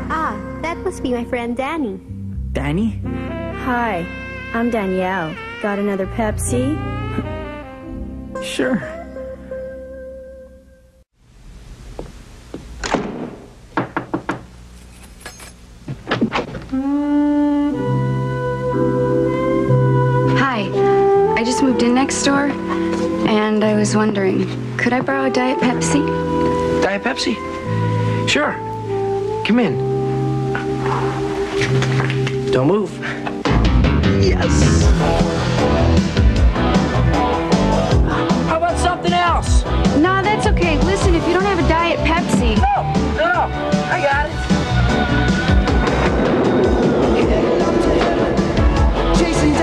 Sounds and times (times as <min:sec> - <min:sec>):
Music: 0:00.0 - 0:11.1, 0:16.7 - 0:49.6.